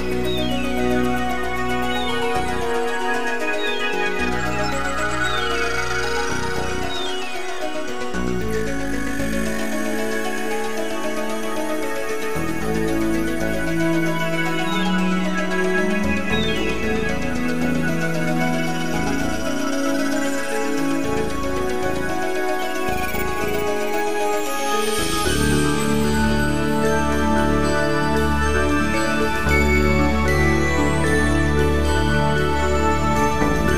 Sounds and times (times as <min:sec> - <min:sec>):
Background music: 0:00.0 - 0:33.7.